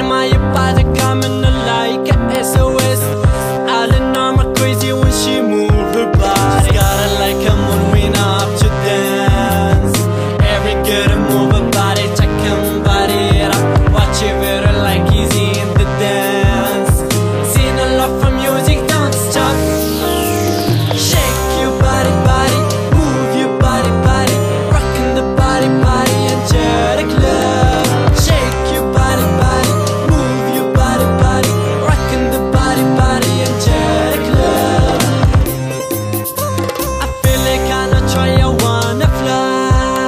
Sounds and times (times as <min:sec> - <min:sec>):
Rhythm and blues: 0:00.0 - 0:40.0.